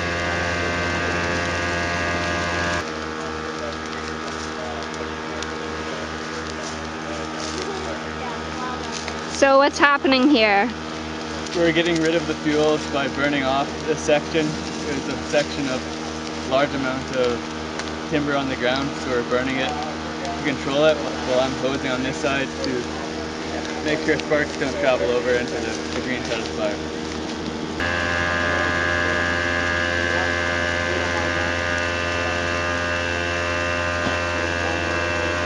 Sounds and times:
Speech: 3.1s - 10.7s, 11.5s - 17.4s, 18.1s - 26.8s, 30.0s - 32.5s.

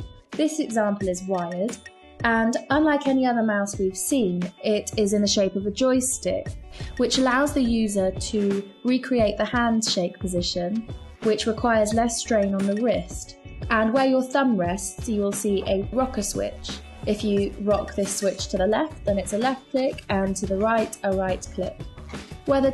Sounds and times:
Music: 0.0s - 22.7s
Speech: 0.4s - 21.8s, 22.5s - 22.7s.

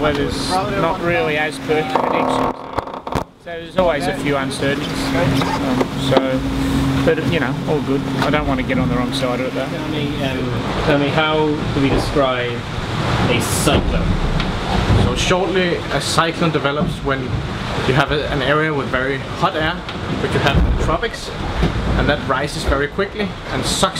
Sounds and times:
Speech: 0.0s - 2.6s, 3.4s - 6.4s, 7.1s - 12.7s, 13.3s - 14.1s, 15.0s - 21.4s, 22.0s - 23.9s.

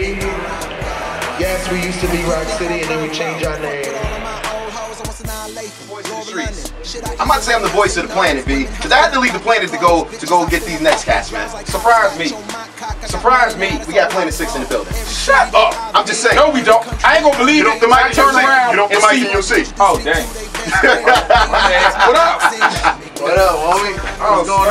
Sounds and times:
Music: 0.0s - 24.7s
Speech: 1.4s - 4.2s, 7.2s - 12.5s, 13.1s - 20.4s, 21.6s - 22.5s, 23.2s - 24.7s.

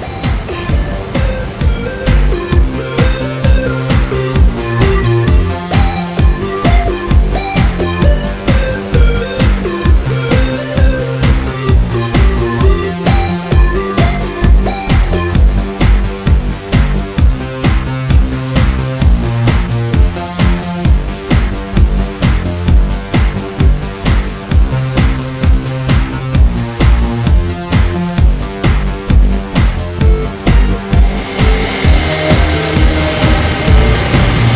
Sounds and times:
Theme music: 0.0s - 34.5s.

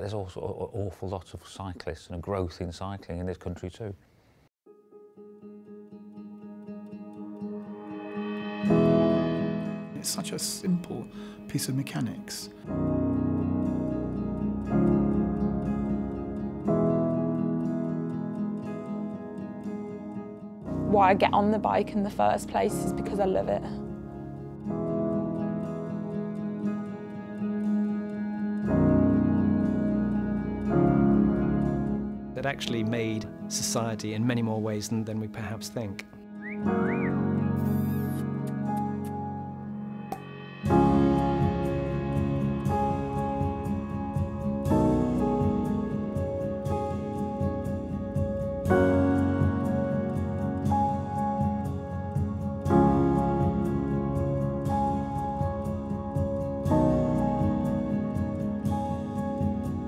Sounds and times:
Speech: 0.0s - 4.0s, 10.0s - 12.5s, 20.9s - 23.8s, 32.4s - 36.2s
Music: 4.6s - 59.8s.

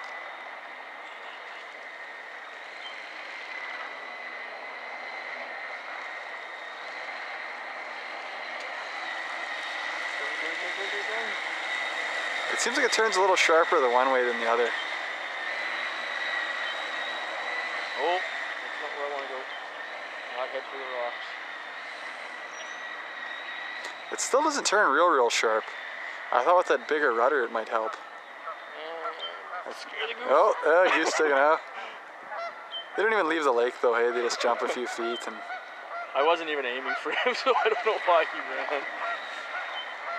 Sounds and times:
Motorboat, speedboat: 1.0s - 40.1s
Speech: 10.2s - 11.4s, 12.5s - 14.8s, 18.0s - 18.2s, 18.8s - 19.5s, 20.4s - 21.3s, 24.2s - 25.7s, 26.3s - 28.0s, 28.8s - 31.7s, 33.0s - 35.4s, 36.2s - 38.9s.

